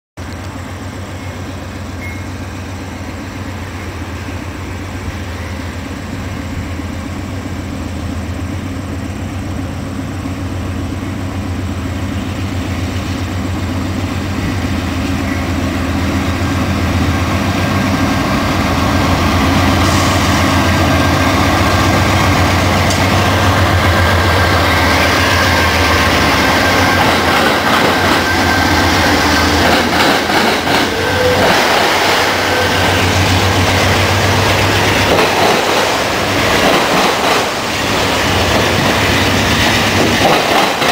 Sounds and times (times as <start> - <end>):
Railroad car, train wagon: 0.2 - 40.9
Train: 0.2 - 40.9.